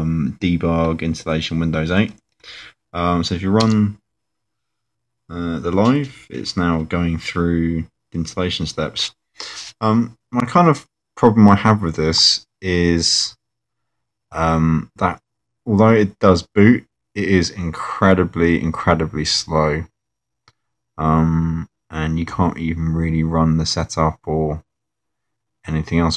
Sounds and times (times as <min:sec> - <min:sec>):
Speech: 0:00.0 - 0:04.0, 0:05.3 - 0:13.4, 0:14.3 - 0:20.0, 0:21.0 - 0:24.7, 0:25.6 - 0:26.1
Inside, small room: 0:00.0 - 0:26.1.